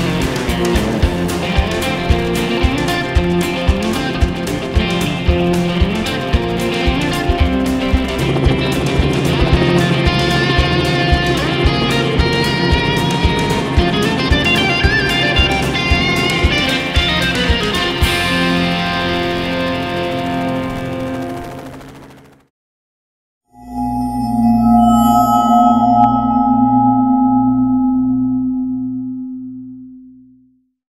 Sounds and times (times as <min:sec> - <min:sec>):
Music: 0:00.0 - 0:22.2, 0:23.6 - 0:26.8
Helicopter: 0:00.0 - 0:22.5.